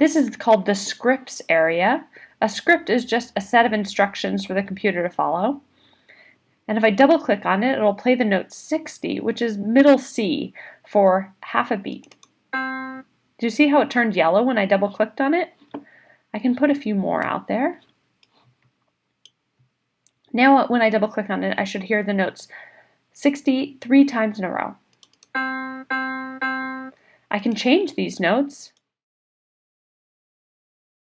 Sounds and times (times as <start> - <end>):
Speech: 0.0 - 5.6, 6.7 - 12.1, 13.4 - 15.6, 16.4 - 17.8, 20.3 - 22.6, 23.2 - 24.8, 27.3 - 28.8.